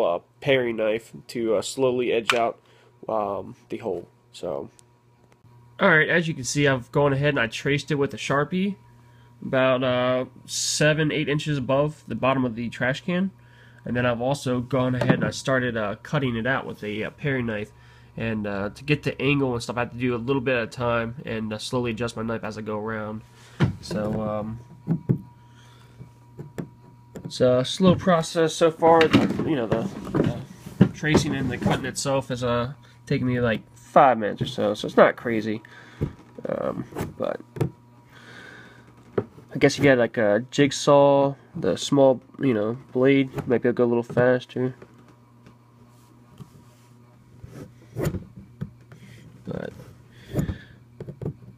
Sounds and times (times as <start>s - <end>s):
Speech: 0.0s - 4.8s, 5.8s - 8.8s, 9.4s - 23.2s, 23.8s - 24.6s, 27.3s - 35.7s, 36.4s - 37.4s, 39.5s - 44.8s, 49.4s - 49.9s.